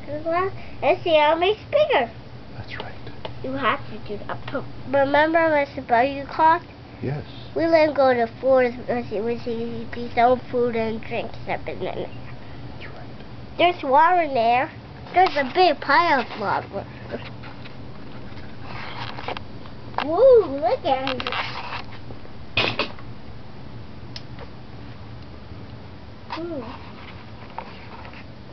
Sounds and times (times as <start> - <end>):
Speech: 3.5 - 12.1.